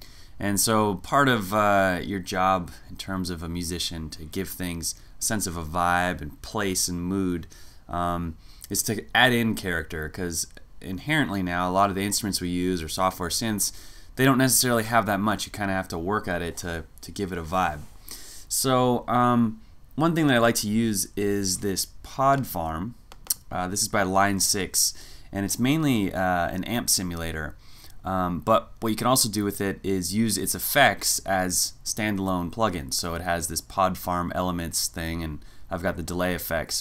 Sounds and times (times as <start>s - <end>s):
Speech: 0.4s - 17.9s, 18.5s - 36.8s.